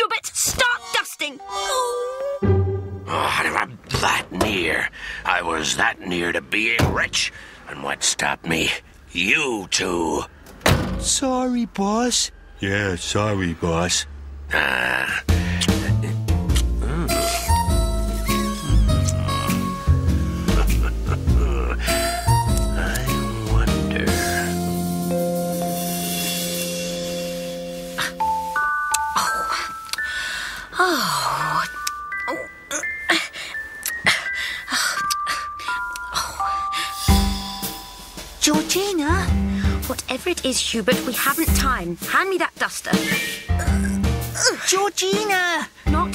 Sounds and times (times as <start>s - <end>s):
Music: 1.4s - 3.5s, 15.3s - 30.6s, 31.2s - 44.5s, 45.1s - 46.1s.